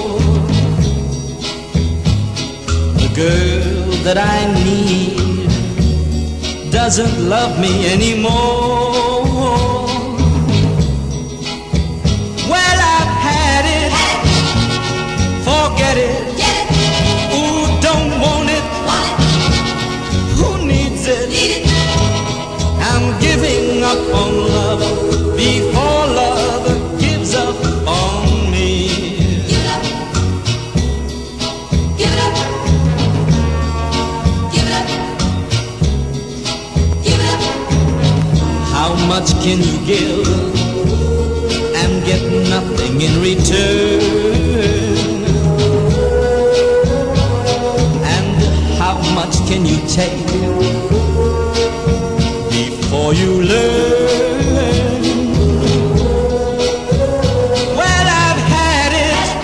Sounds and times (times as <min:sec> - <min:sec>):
Funk: 0:00.0 - 0:59.4.